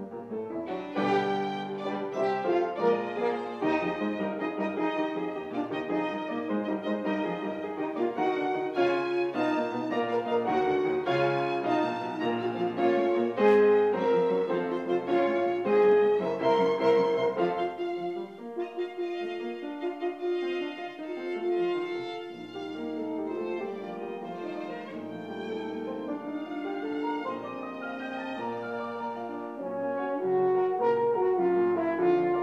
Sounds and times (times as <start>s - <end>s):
Violin, fiddle: 0.0s - 29.6s
French horn: 0.0s - 32.4s.